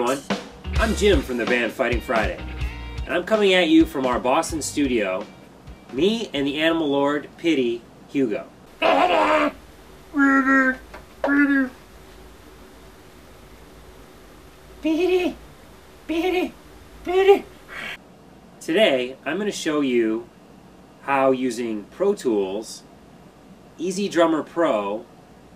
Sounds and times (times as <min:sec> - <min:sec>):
Speech: 0:00.0 - 0:02.4, 0:03.1 - 0:05.3, 0:05.9 - 0:08.5, 0:14.8 - 0:15.4, 0:16.1 - 0:17.5, 0:18.6 - 0:20.3, 0:21.0 - 0:22.9, 0:23.8 - 0:25.1.